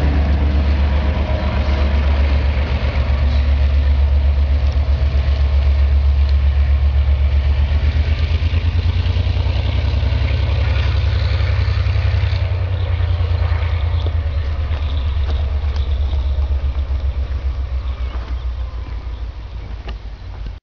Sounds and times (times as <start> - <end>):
Medium engine (mid frequency): 0.0 - 20.6
Vehicle: 0.0 - 20.6.